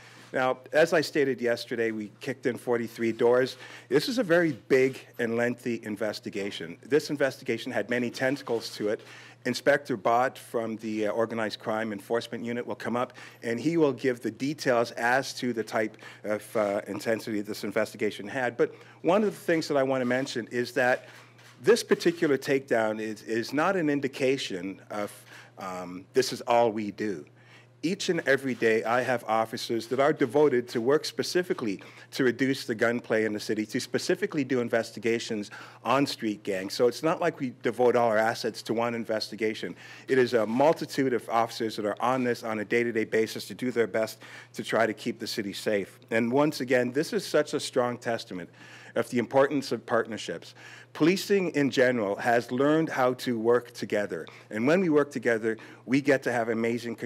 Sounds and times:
Speech: 0:00.3 - 0:57.0.

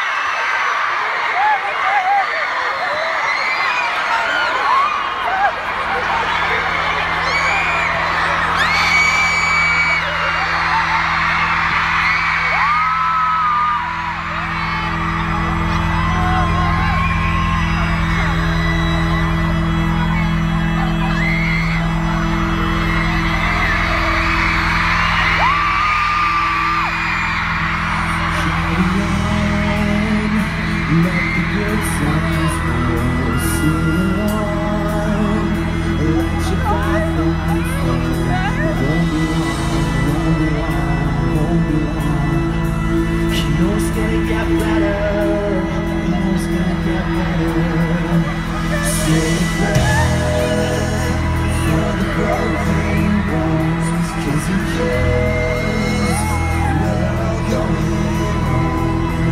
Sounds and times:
Cheering: 0:00.0 - 0:59.3
Crowd: 0:00.0 - 0:59.3.

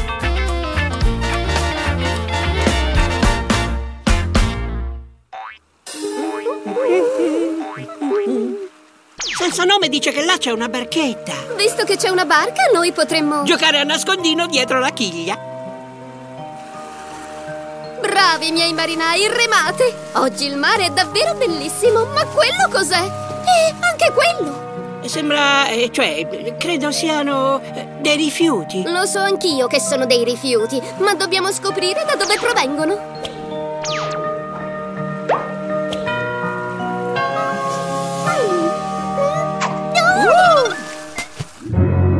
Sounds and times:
Music: 0:00.0 - 0:05.3, 0:05.9 - 0:07.8, 0:08.7 - 0:42.1
Stream: 0:05.4 - 0:41.8.

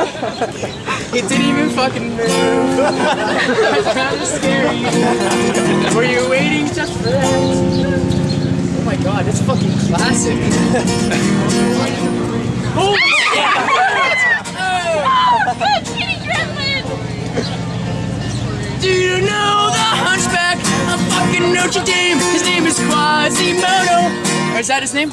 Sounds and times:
Acoustic guitar: 0:00.0 - 0:25.1.

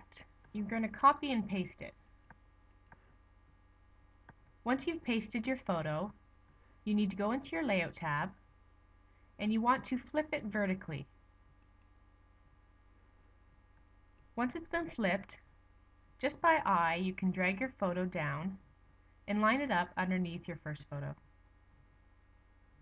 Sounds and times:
Speech: 0:00.0 - 0:02.0, 0:04.7 - 0:06.2, 0:06.9 - 0:08.4, 0:09.4 - 0:11.1, 0:14.4 - 0:15.4, 0:16.2 - 0:18.6, 0:19.3 - 0:21.2.

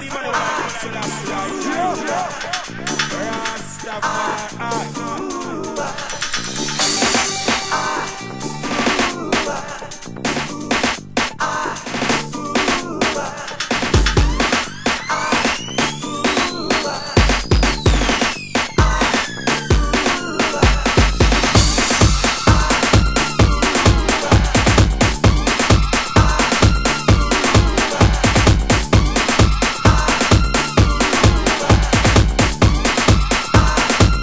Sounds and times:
Music: 0:00.0 - 0:34.2.

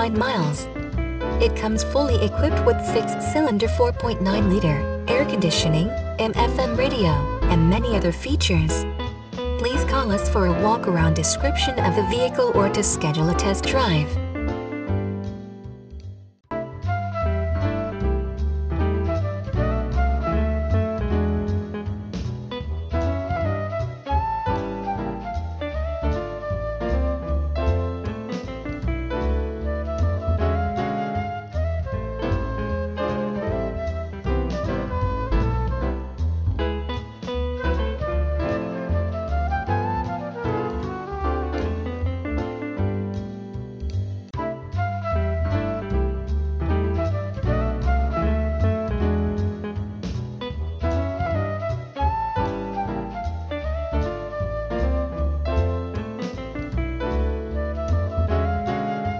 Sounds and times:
Music: 0:00.0 - 0:59.1.

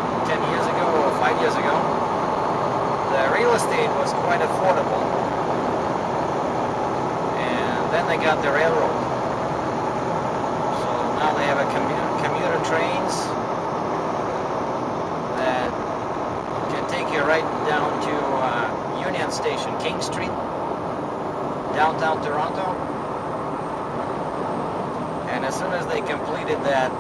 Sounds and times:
Car: 0:00.0 - 0:27.0.

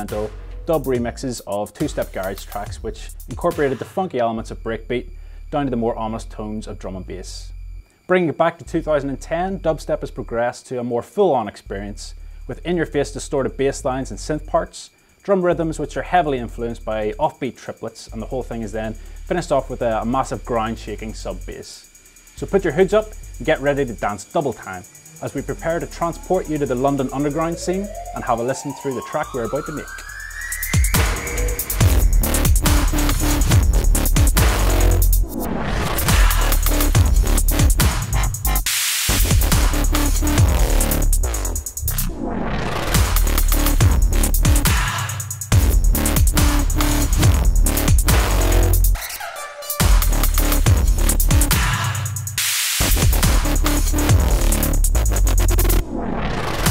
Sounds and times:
Speech: 0:00.0 - 0:07.5, 0:08.1 - 0:30.0.

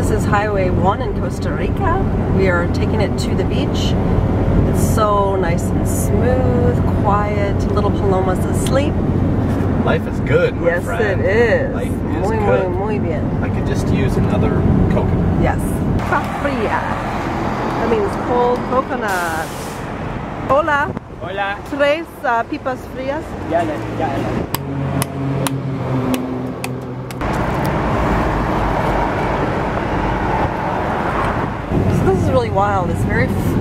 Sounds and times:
Bus: 0:00.0 - 0:33.6
Car: 0:00.0 - 0:33.6.

